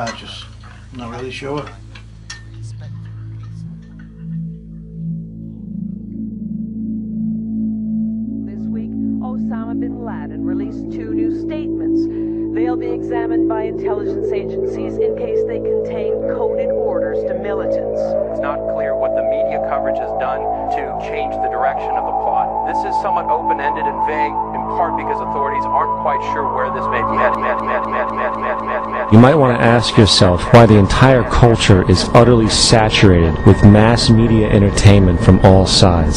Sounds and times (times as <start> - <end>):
Speech: 0.0 - 1.8, 2.6 - 3.0, 8.5 - 36.1
Music: 0.0 - 36.1.